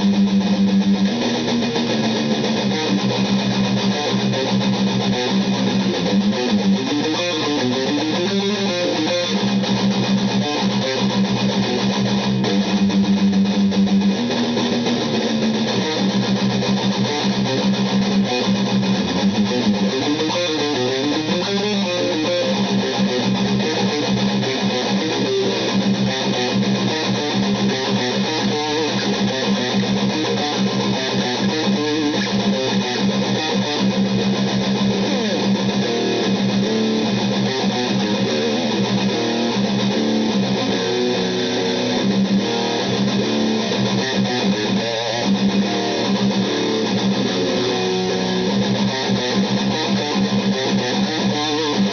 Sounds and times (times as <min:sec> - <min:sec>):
Bass guitar: 0:00.0 - 0:51.9.